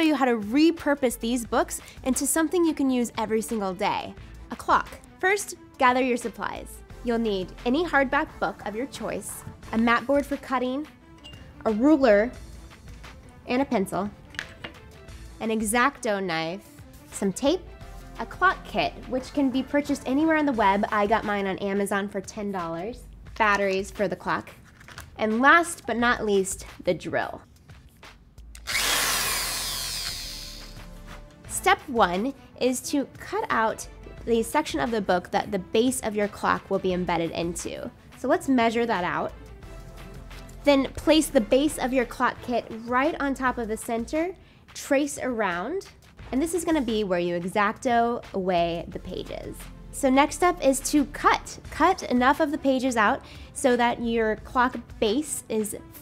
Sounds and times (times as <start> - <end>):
Speech: 0.0 - 10.9, 11.7 - 12.4, 13.5 - 14.1, 15.4 - 16.6, 17.2 - 17.6, 18.2 - 24.5, 25.2 - 27.4, 31.5 - 39.3, 40.7 - 56.0
Music: 0.0 - 56.0.